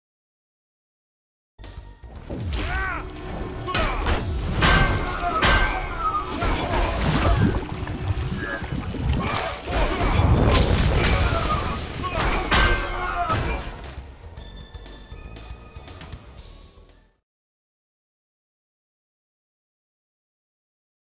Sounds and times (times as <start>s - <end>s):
Music: 1.6s - 17.2s.